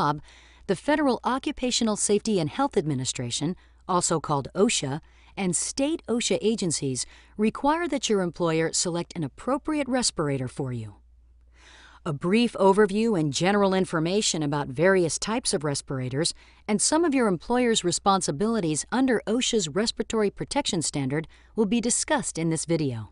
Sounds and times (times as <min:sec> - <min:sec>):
Speech: 0:00.0 - 0:11.0, 0:12.1 - 0:23.1.